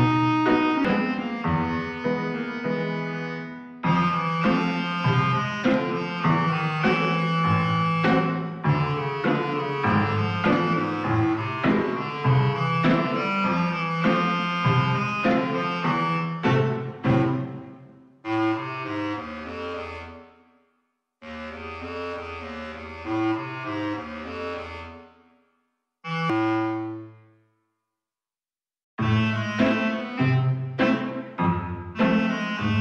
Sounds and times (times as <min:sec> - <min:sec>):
Wind instrument, woodwind instrument: 0:00.0 - 0:20.3, 0:21.3 - 0:25.1, 0:26.1 - 0:27.1, 0:29.0 - 0:32.8.